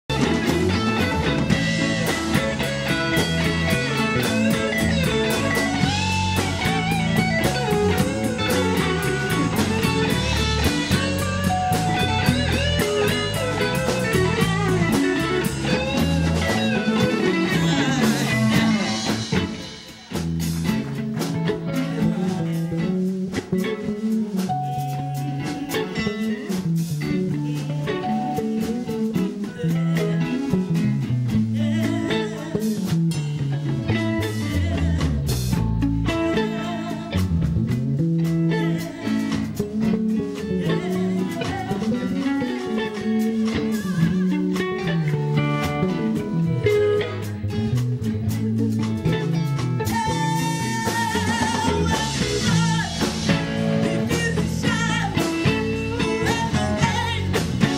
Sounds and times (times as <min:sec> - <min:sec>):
Music: 0:00.0 - 0:57.7
Female singing: 0:15.4 - 0:19.4, 0:21.7 - 0:23.0, 0:27.0 - 0:30.8, 0:31.6 - 0:33.0, 0:33.9 - 0:37.3, 0:38.5 - 0:45.1, 0:49.9 - 0:57.7.